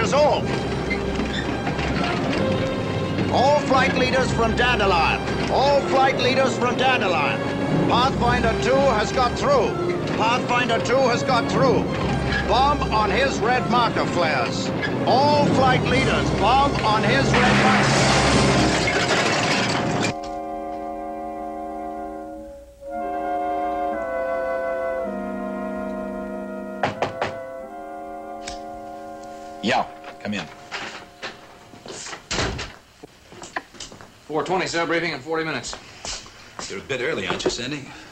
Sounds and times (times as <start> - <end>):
Music: 0.0 - 31.8
Speech: 3.3 - 11.8, 12.5 - 17.8, 29.6 - 30.5, 34.3 - 35.8, 36.6 - 38.0.